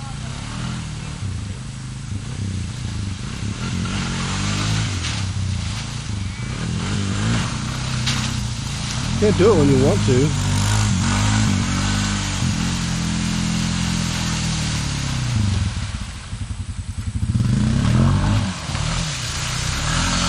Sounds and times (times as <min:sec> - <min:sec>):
Speech: 0:09.2 - 0:10.4.